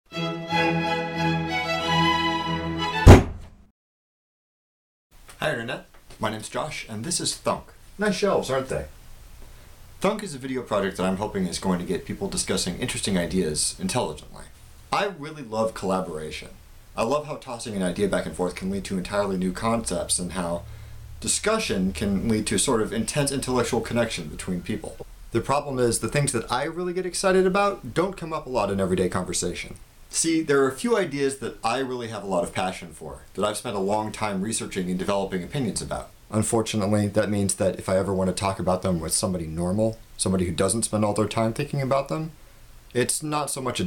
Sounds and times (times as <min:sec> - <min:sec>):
Music: 0:00.1 - 0:03.3
Thunk: 0:03.0 - 0:03.6.